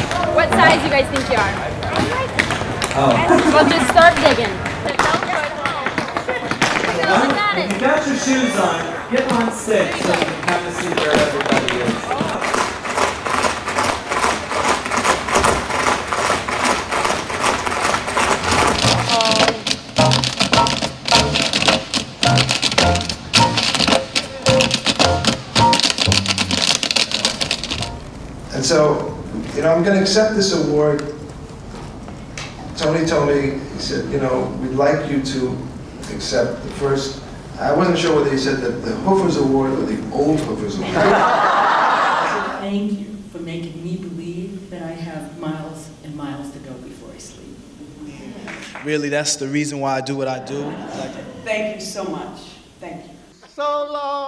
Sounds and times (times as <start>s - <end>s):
Male speech, man speaking: 2.9s - 3.3s, 6.9s - 12.4s, 28.5s - 31.2s, 32.8s - 41.0s, 48.8s - 51.3s, 53.4s - 54.2s.